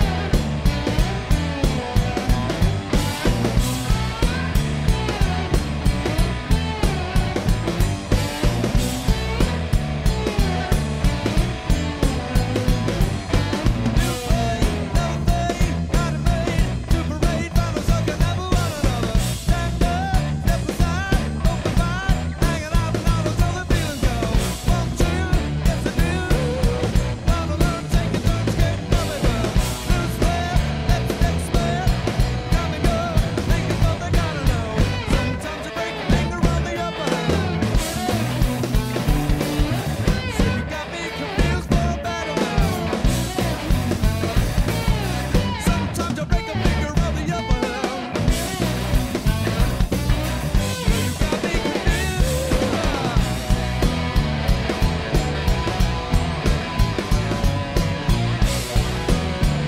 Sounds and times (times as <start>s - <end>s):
Music: 0.0s - 59.6s.